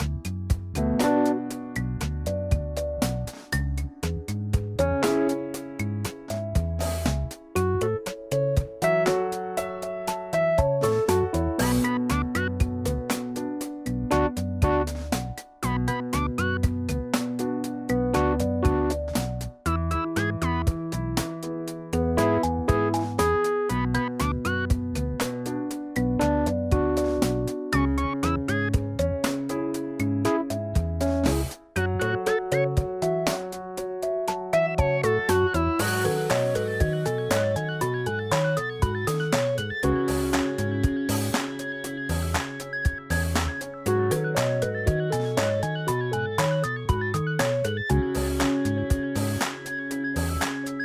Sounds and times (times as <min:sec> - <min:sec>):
Music: 0:00.0 - 0:50.8.